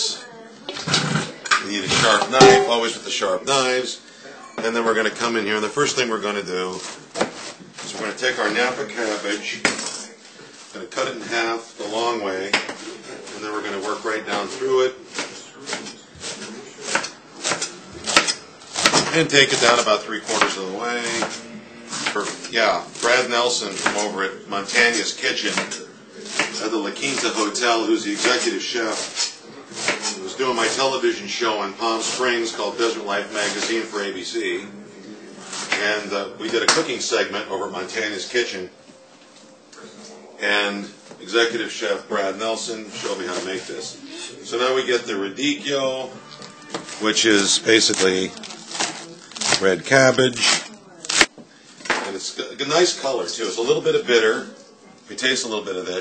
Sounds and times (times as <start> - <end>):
Speech: 7.9 - 10.2, 10.8 - 15.9, 19.1 - 21.3, 47.0 - 48.4, 49.5 - 50.8.